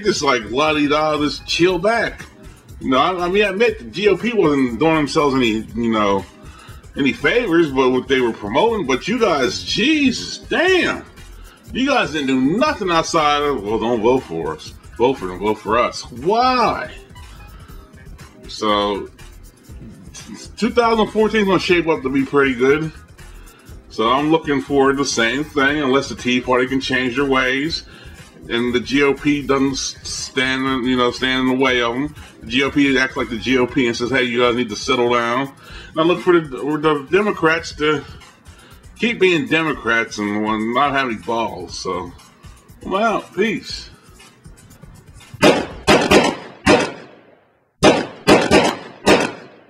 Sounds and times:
Hip hop music: 0.0 - 46.9.

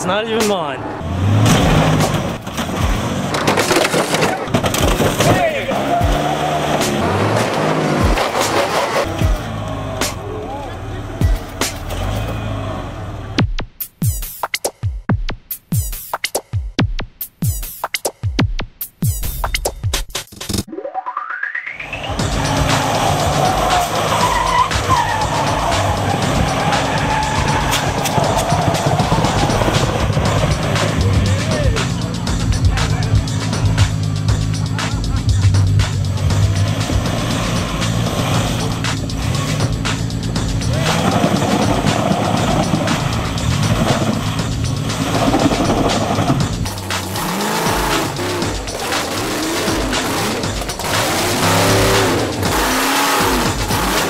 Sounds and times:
Car: 0.0 - 13.6, 21.8 - 54.0
Music: 1.7 - 54.0.

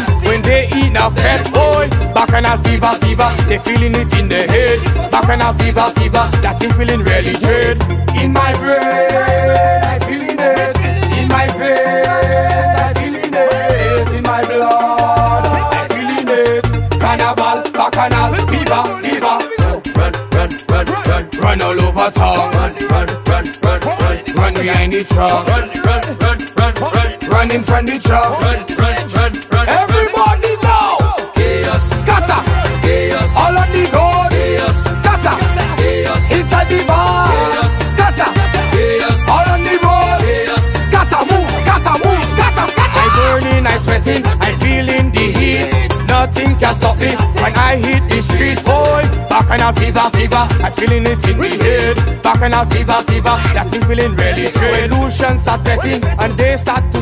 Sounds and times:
Music of Africa: 0.0 - 57.0.

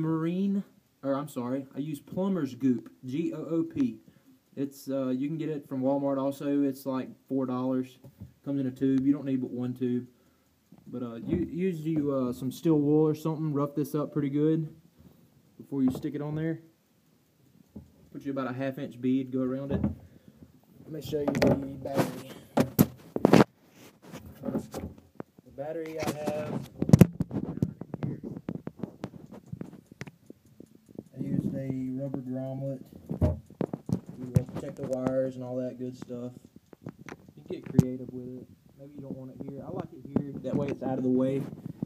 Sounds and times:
Speech: 0.0 - 4.0, 4.6 - 10.1, 10.9 - 14.8, 15.6 - 16.7, 18.1 - 19.9, 20.9 - 22.5, 25.5 - 26.8, 31.1 - 32.9, 34.2 - 36.4, 37.4 - 41.5.

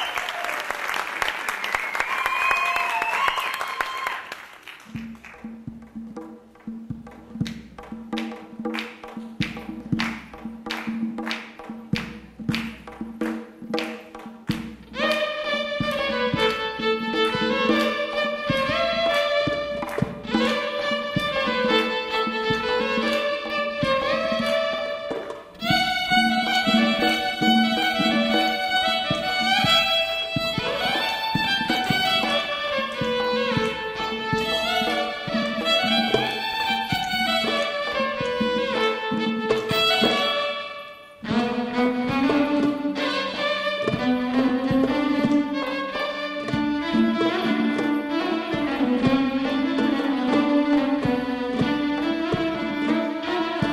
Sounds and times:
Violin, fiddle: 15.0 - 53.7.

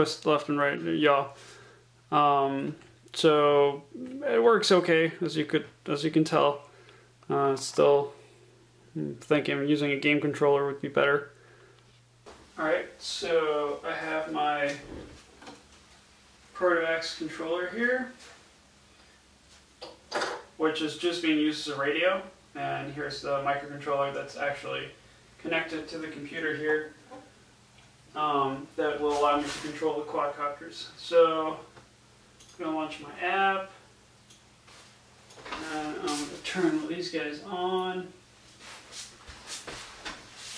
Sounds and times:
Speech: 0.0 - 1.4, 2.1 - 6.7, 7.3 - 8.2, 8.9 - 11.3, 12.6 - 15.0, 16.5 - 18.2, 20.6 - 27.0, 28.1 - 31.7, 32.6 - 33.8, 35.5 - 38.2.

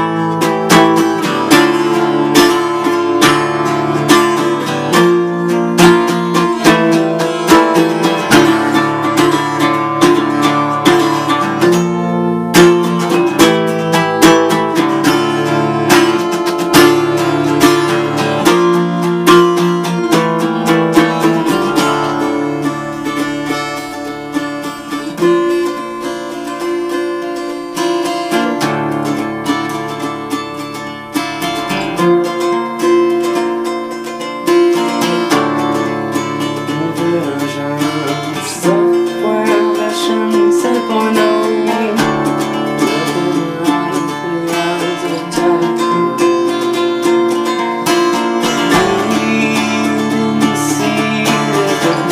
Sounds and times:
Acoustic guitar: 0.0 - 52.1.

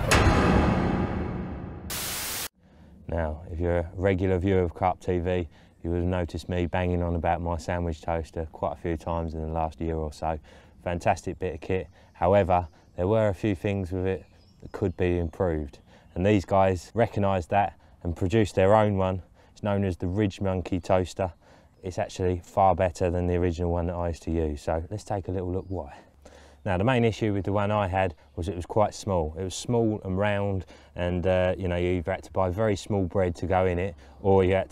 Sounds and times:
Speech: 3.1 - 34.7.

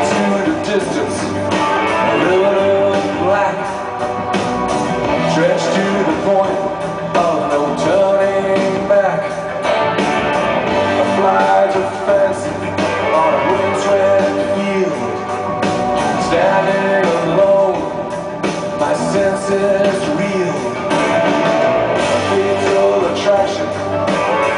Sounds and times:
Music: 0.0 - 24.5.

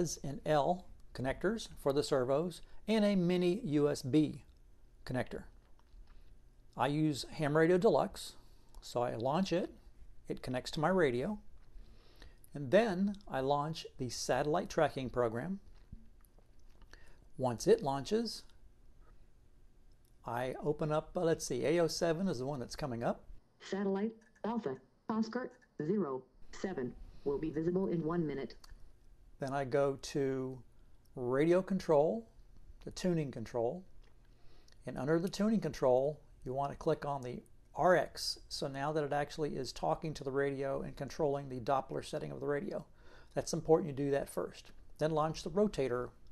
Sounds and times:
Speech: 0.0 - 5.5, 6.8 - 11.4, 12.5 - 15.6, 17.4 - 18.5, 20.3 - 28.6, 29.4 - 30.6, 31.2 - 33.9, 34.8 - 46.2.

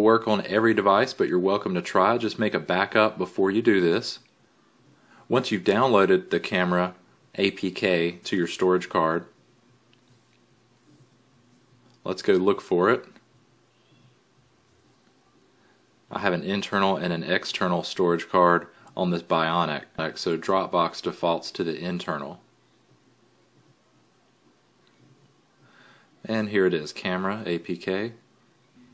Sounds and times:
Speech: 0.0 - 4.3, 5.3 - 9.4, 12.0 - 13.2, 16.1 - 22.5, 26.2 - 28.2.

